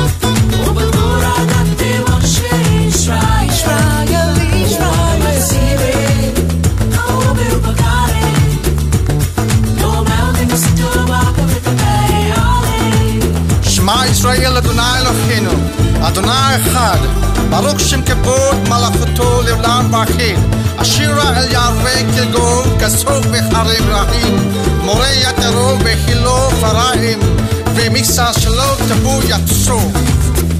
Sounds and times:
Gospel music: 0.0 - 30.5.

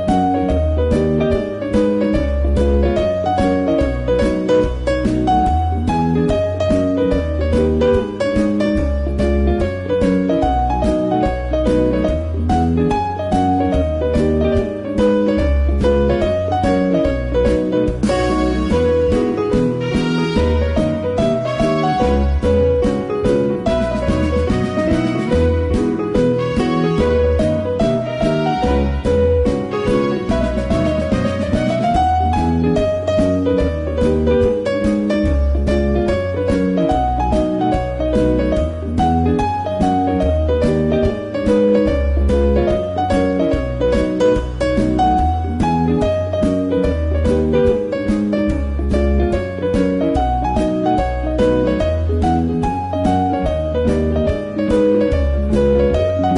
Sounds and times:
Music: 0.0 - 56.3.

